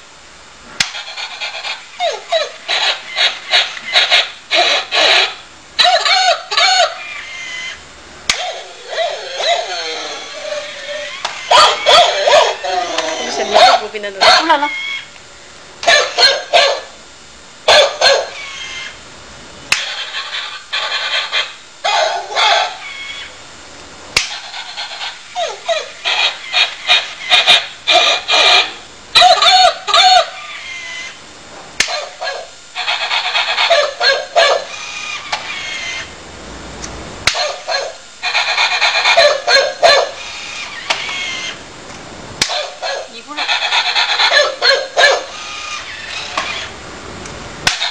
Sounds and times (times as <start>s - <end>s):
Yip: 1.2s - 7.4s, 8.3s - 14.8s, 15.8s - 16.9s, 17.7s - 18.5s, 20.8s - 22.8s, 25.0s - 31.2s, 31.8s - 34.7s, 37.3s - 40.2s, 42.4s - 45.4s
Bow-wow: 11.5s - 12.7s, 13.4s - 14.6s, 15.9s - 16.9s, 17.7s - 18.4s, 21.4s - 22.8s, 31.8s - 32.5s, 33.4s - 34.7s, 37.3s - 40.2s, 42.5s - 43.2s, 43.8s - 45.4s.